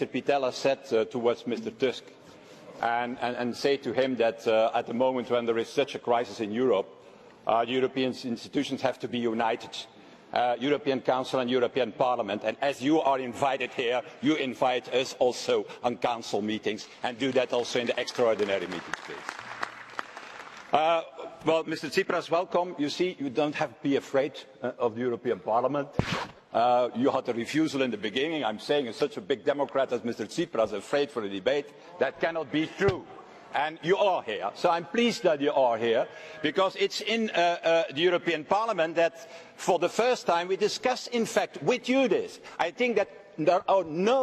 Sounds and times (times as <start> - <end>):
Speech: 0.0 - 2.1, 2.8 - 19.2, 20.8 - 44.2.